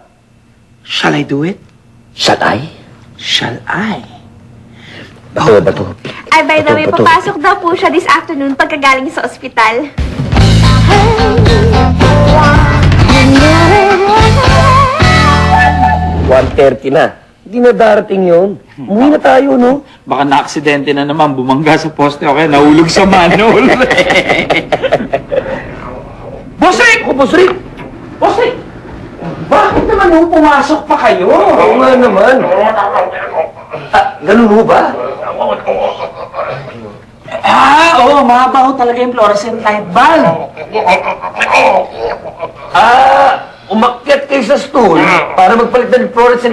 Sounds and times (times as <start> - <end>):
Music: 10.0 - 16.6.